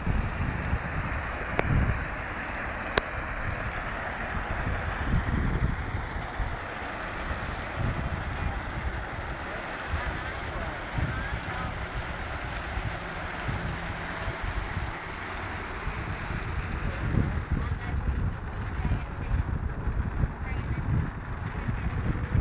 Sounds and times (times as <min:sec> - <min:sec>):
Speech: 0:08.2 - 0:11.9, 0:16.7 - 0:22.2.